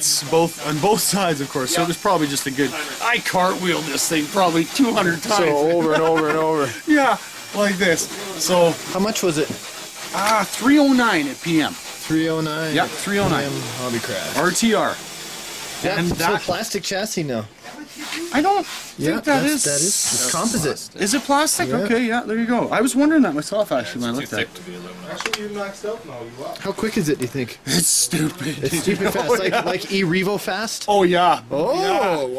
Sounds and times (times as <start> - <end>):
Speech: 0.0 - 15.0.